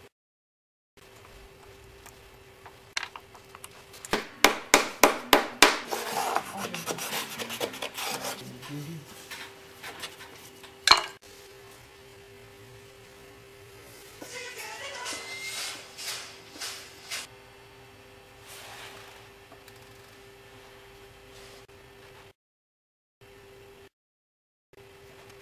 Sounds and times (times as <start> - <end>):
Music: 14.2 - 15.9.